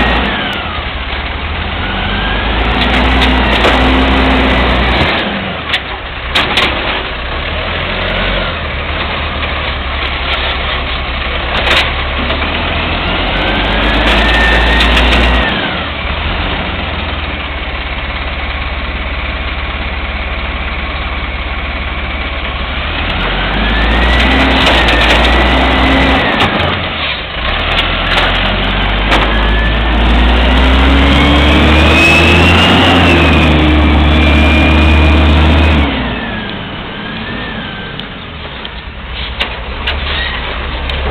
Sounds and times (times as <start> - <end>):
Vehicle: 0.0 - 41.1.